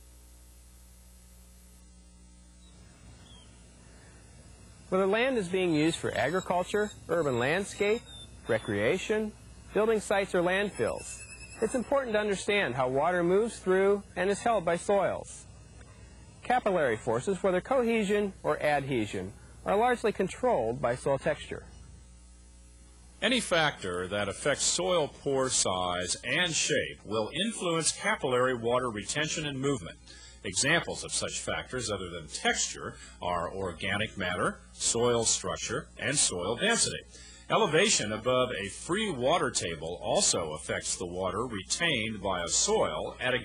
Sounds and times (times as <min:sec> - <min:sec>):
Speech: 0:04.9 - 0:15.5, 0:16.4 - 0:21.7, 0:23.2 - 0:43.4.